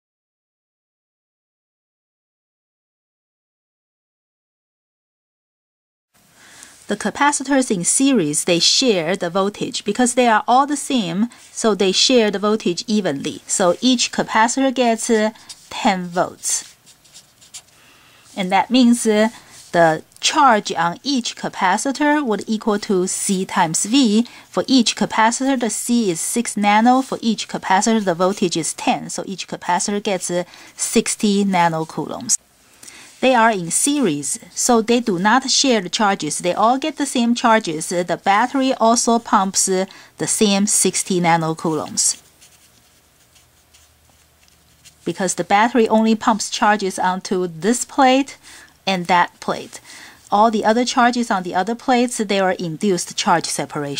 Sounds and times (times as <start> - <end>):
Speech: 6.9 - 16.8, 18.3 - 32.4, 33.2 - 42.2, 45.1 - 53.9.